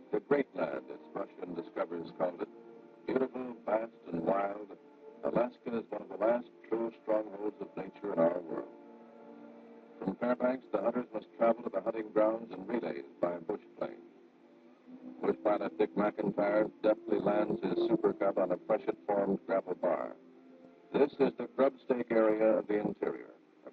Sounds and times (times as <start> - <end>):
Speech: 0.0 - 2.5, 3.1 - 8.7, 10.0 - 14.0, 15.0 - 20.2, 21.0 - 23.7.